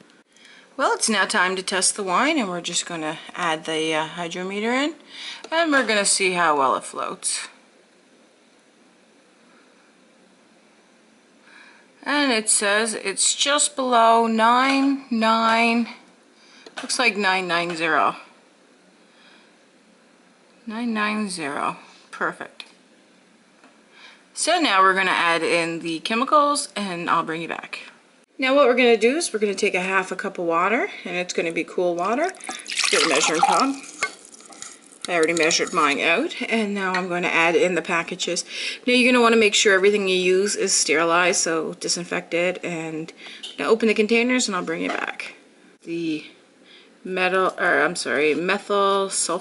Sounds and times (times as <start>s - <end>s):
Trickle, dribble: 32.2s - 35.1s.